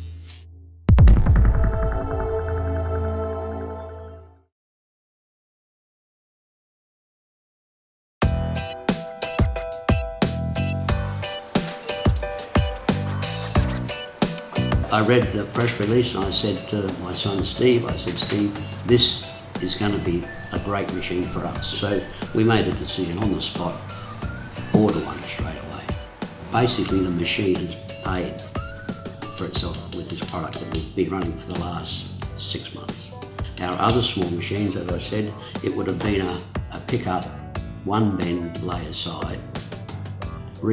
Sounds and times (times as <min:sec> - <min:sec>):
Music: 0:00.0 - 0:04.5, 0:08.2 - 0:40.7
Speech: 0:14.9 - 0:23.8, 0:24.7 - 0:28.4, 0:29.4 - 0:39.5.